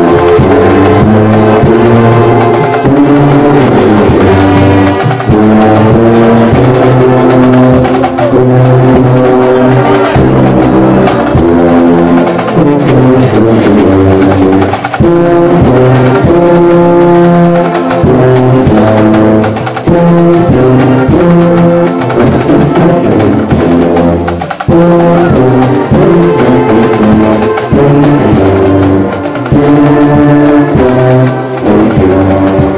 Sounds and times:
Musical instrument: 0.0 - 32.7.

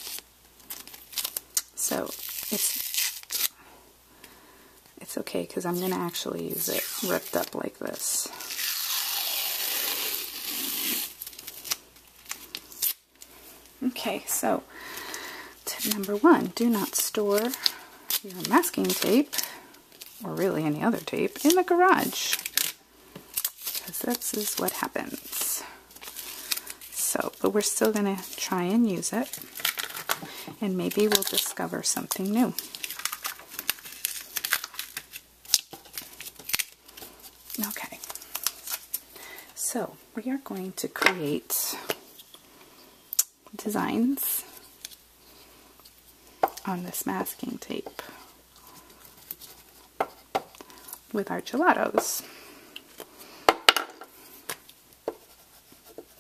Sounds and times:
Speech: 5.0 - 8.3, 13.8 - 14.6, 20.2 - 22.4, 46.7 - 48.0, 51.1 - 52.3.

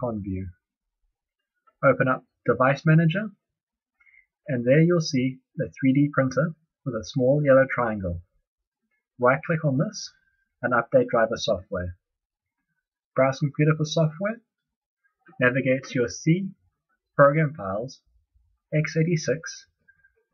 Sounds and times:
Speech: 0.0 - 0.7, 1.8 - 3.4, 4.4 - 8.3, 9.2 - 12.0, 13.2 - 14.5, 15.3 - 16.6, 17.2 - 18.1, 18.7 - 19.8.

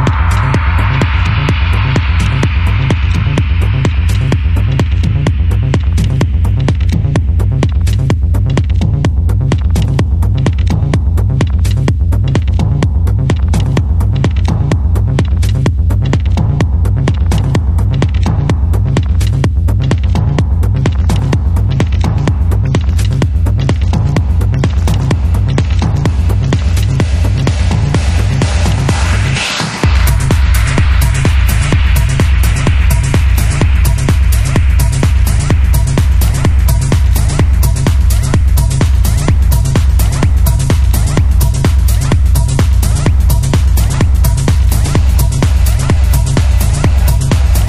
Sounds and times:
Music: 0.0 - 47.6.

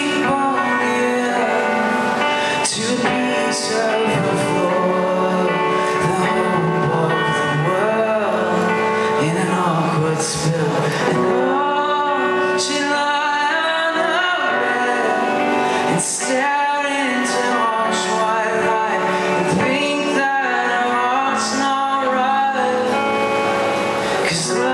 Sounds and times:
Music: 0.0 - 24.7.

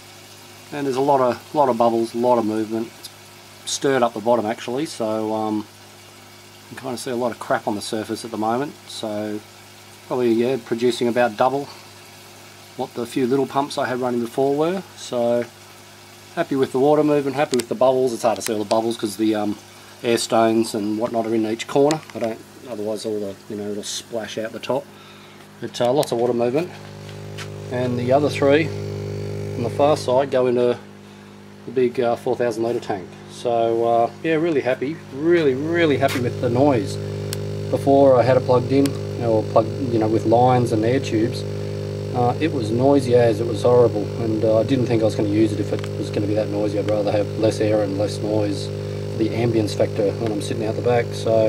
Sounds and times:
Speech: 0.7 - 3.0, 3.6 - 5.7, 6.7 - 9.4, 10.1 - 11.8, 12.8 - 15.5, 16.4 - 24.9, 25.6 - 26.8, 27.7 - 28.8, 29.6 - 30.9, 31.6 - 37.0, 37.7 - 41.5, 42.1 - 51.4.

